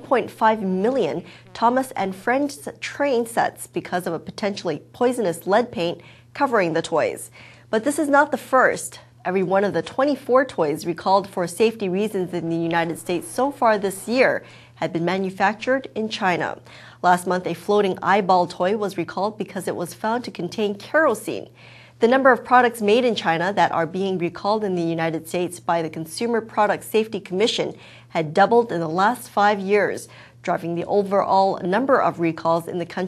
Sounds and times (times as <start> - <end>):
Speech: 0.0 - 33.0.